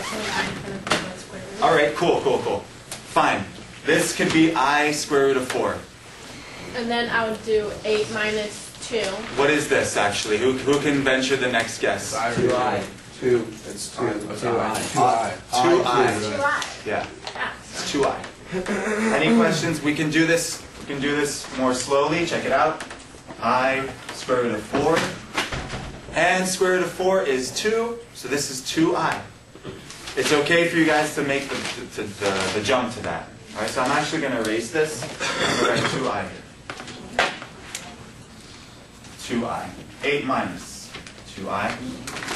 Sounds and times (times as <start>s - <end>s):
Inside, small room: 0.0s - 42.3s.